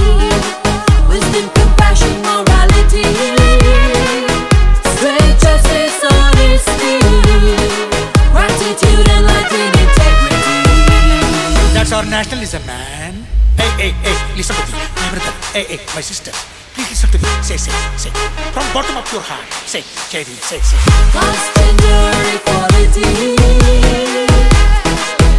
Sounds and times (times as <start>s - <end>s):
Music: 0.0s - 25.3s.